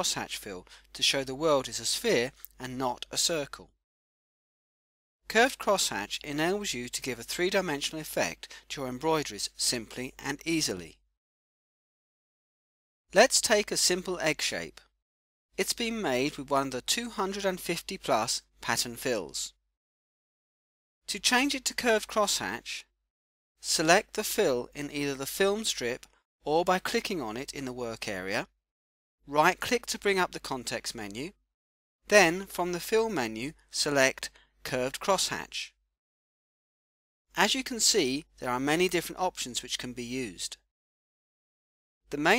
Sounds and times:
Speech: 0.0s - 3.7s, 5.3s - 11.0s, 13.1s - 14.9s, 15.6s - 19.6s, 21.1s - 22.9s, 23.6s - 28.5s, 29.3s - 31.4s, 32.1s - 35.8s, 37.4s - 40.6s, 42.1s - 42.3s.

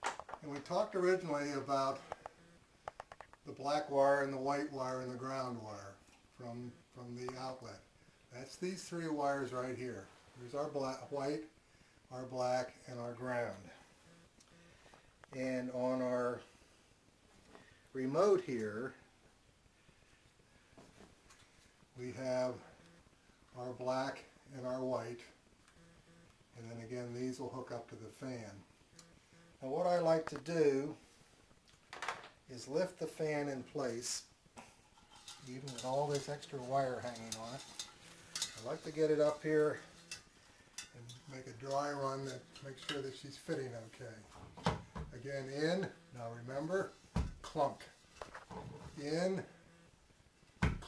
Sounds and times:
Speech: 0.4s - 2.0s, 3.5s - 11.5s, 12.1s - 13.8s, 15.4s - 16.5s, 17.9s - 19.0s, 22.0s - 22.7s, 23.6s - 25.4s, 26.6s - 28.7s, 29.6s - 31.0s, 32.5s - 34.3s, 35.4s - 37.8s, 38.5s - 39.9s, 40.9s - 44.3s, 45.1s - 48.0s, 48.8s - 49.5s.

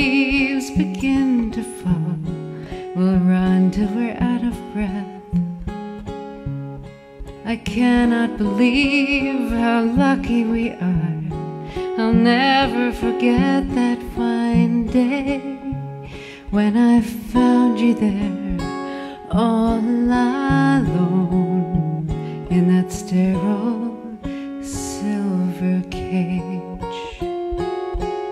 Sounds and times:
Music: 0.0s - 28.3s.

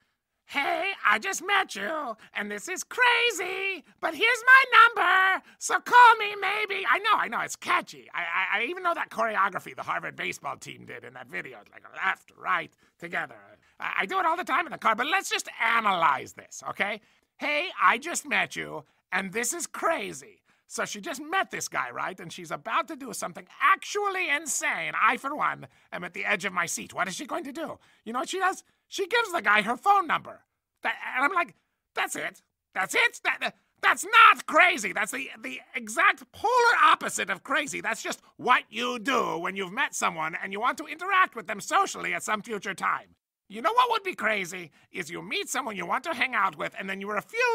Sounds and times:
Speech: 0.5s - 47.5s.

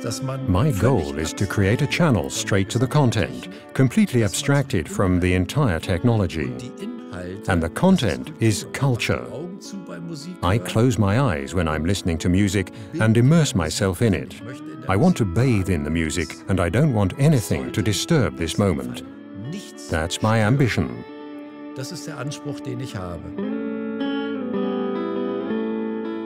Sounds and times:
Speech: 0.0s - 21.0s, 21.8s - 23.3s
Music: 0.0s - 26.2s.

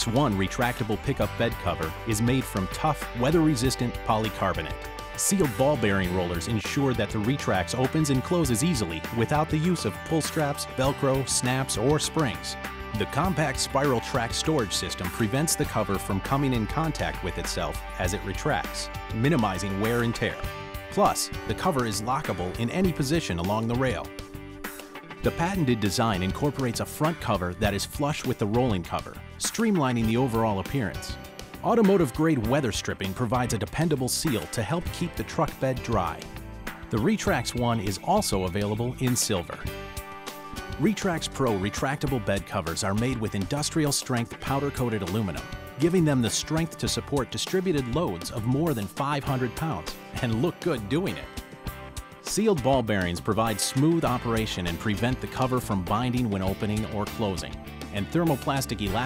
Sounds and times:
Speech: 0.0s - 24.1s, 25.2s - 36.3s, 36.9s - 39.7s, 40.8s - 51.4s, 52.2s - 59.0s
Music: 0.0s - 59.0s.

